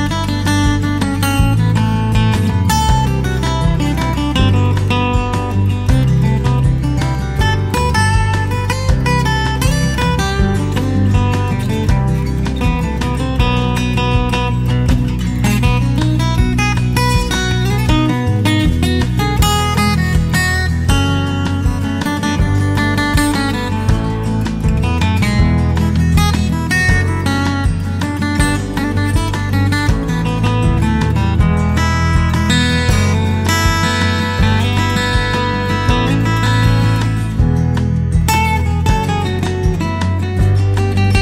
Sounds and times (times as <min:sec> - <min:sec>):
Music: 0:00.0 - 0:41.2.